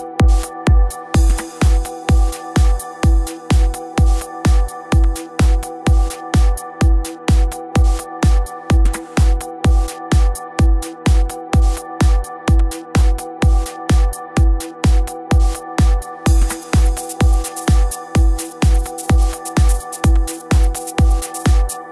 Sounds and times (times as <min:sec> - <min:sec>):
Music: 0:00.0 - 0:21.9.